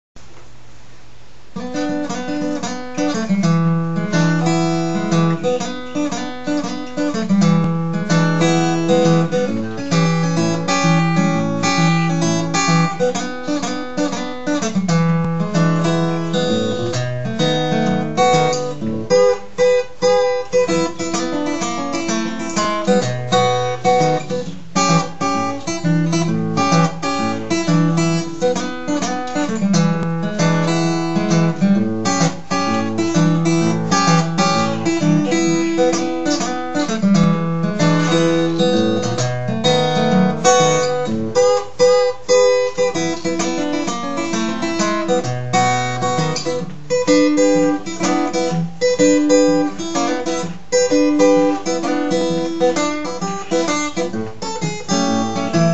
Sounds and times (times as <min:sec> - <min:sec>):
Acoustic guitar: 0:00.2 - 0:55.7.